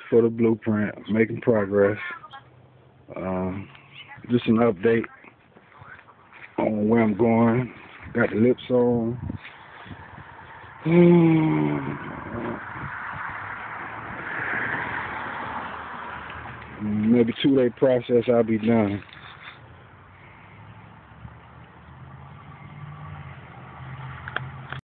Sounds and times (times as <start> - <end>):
Speech: 0.0 - 2.4, 3.1 - 9.2, 16.8 - 19.0.